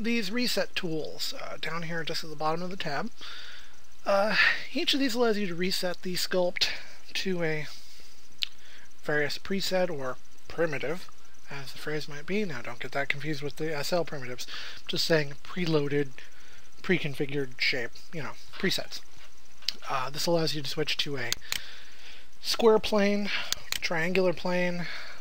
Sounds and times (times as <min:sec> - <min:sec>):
Speech: 0:00.0 - 0:03.2, 0:04.0 - 0:07.8, 0:09.0 - 0:16.2, 0:16.8 - 0:19.0, 0:19.7 - 0:21.4, 0:22.4 - 0:25.1.